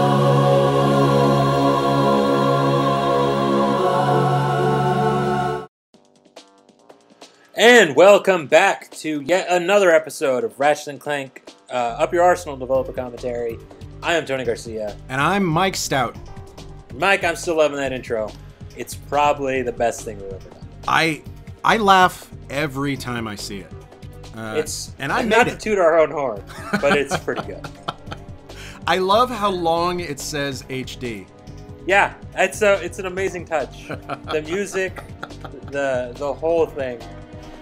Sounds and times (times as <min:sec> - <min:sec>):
Music: 0:00.0 - 0:37.6
Speech: 0:07.6 - 0:16.2, 0:17.0 - 0:23.7, 0:24.4 - 0:27.8, 0:28.8 - 0:31.3, 0:31.9 - 0:37.0.